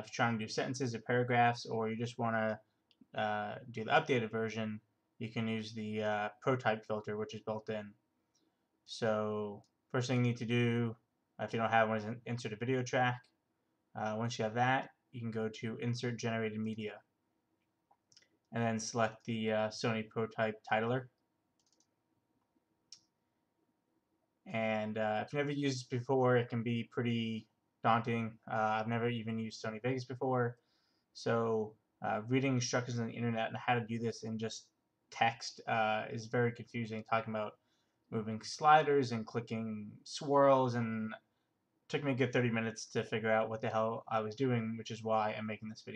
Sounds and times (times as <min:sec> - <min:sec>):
Speech: 0:00.0 - 0:08.0, 0:08.9 - 0:13.4, 0:14.0 - 0:17.1, 0:18.5 - 0:21.2, 0:24.5 - 0:30.6, 0:31.2 - 0:41.3, 0:41.9 - 0:45.9.